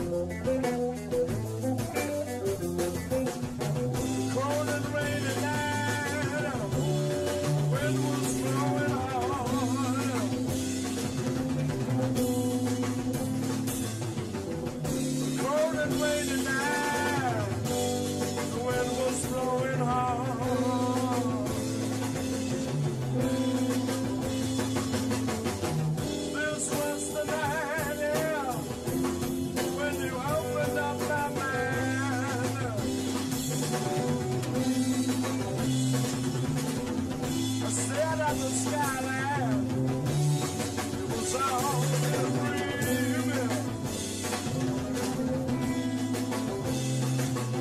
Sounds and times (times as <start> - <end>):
Blues: 0.0 - 47.6
Drum: 0.0 - 47.6
Drum kit: 0.0 - 47.6
Guitar: 0.0 - 47.6.